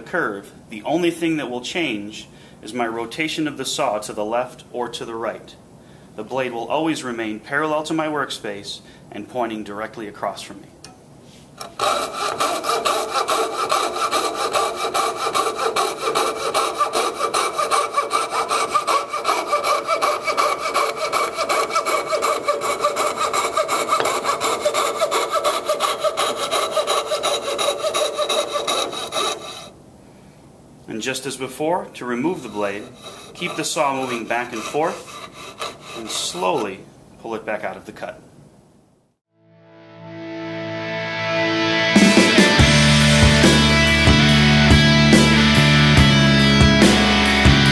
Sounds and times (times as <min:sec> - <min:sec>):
Rub: 0:11.3 - 0:29.7, 0:32.3 - 0:36.7
Sawing: 0:11.6 - 0:29.8, 0:32.2 - 0:36.8, 0:42.2 - 0:47.7.